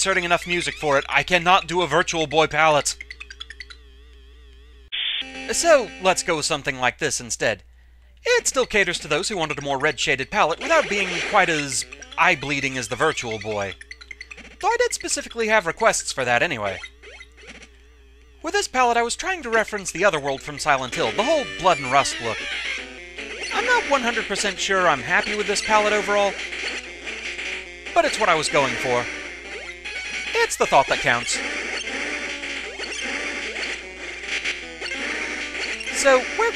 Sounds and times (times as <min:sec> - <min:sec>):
Speech: 0:00.0 - 0:03.0, 0:05.5 - 0:07.6, 0:08.2 - 0:13.8, 0:14.6 - 0:16.8, 0:18.5 - 0:22.5, 0:23.5 - 0:26.4, 0:28.0 - 0:29.1, 0:30.4 - 0:31.4, 0:35.9 - 0:36.5.